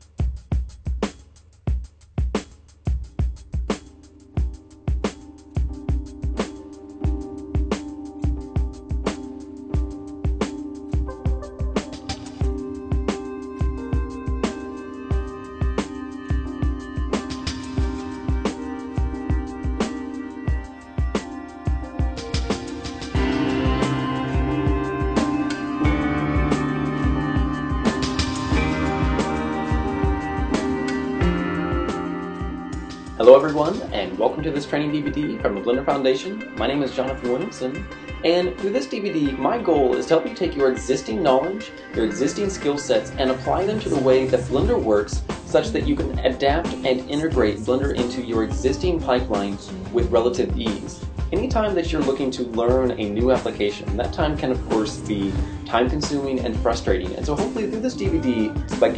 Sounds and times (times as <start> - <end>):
Music: 0.0 - 58.9.